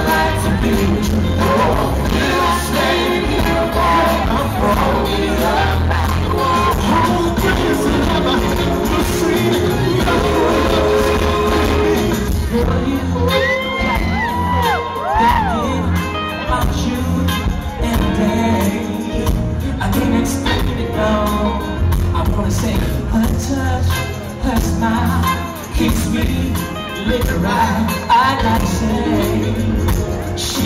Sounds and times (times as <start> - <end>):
Blues: 0.0 - 30.6.